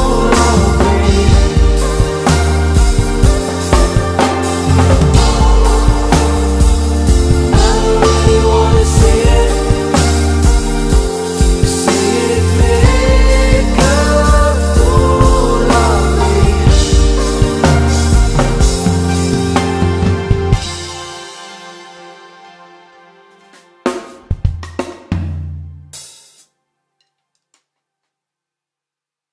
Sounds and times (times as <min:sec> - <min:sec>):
Hi-hat: 0:00.0 - 0:19.5.